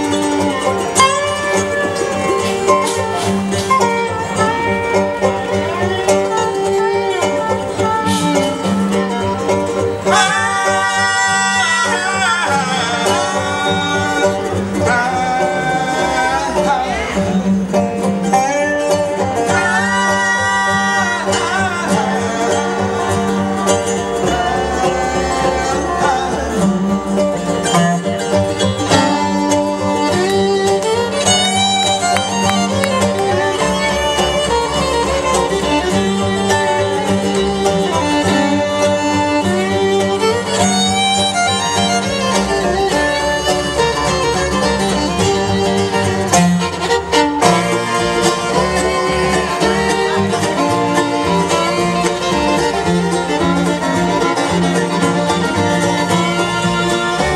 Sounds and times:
Banjo: 0.0s - 57.3s.

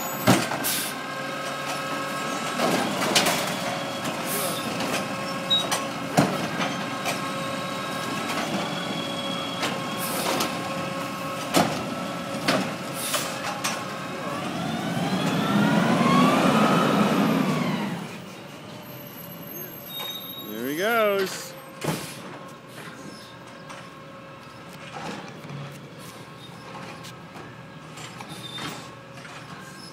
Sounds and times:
Vehicle: 0.0s - 29.9s
Speech: 20.4s - 21.5s.

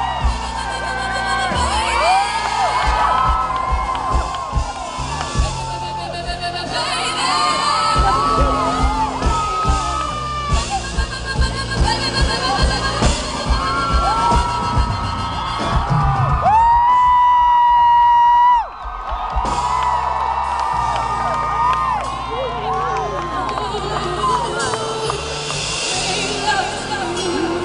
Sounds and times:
Whoop: 0.0s - 10.8s, 13.4s - 25.3s
Music: 0.0s - 27.6s.

